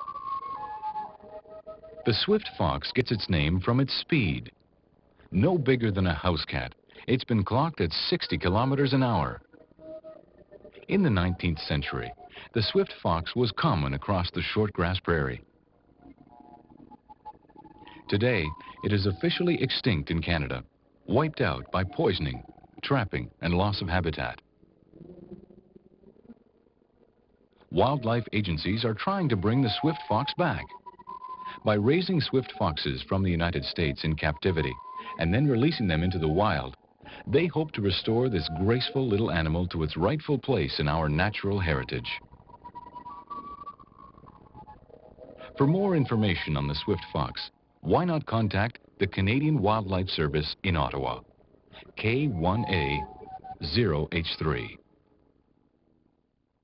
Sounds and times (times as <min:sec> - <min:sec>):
Music: 0:00.0 - 0:56.6
Speech: 0:02.1 - 0:04.5, 0:05.3 - 0:09.4, 0:10.9 - 0:15.4, 0:18.0 - 0:24.4, 0:27.7 - 0:30.7, 0:31.6 - 0:42.2, 0:45.5 - 0:51.2, 0:51.8 - 0:54.8.